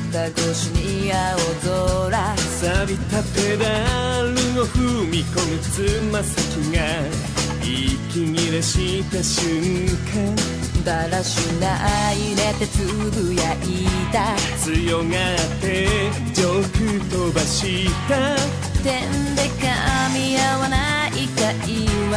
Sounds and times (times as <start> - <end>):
Music: 0.0 - 22.1.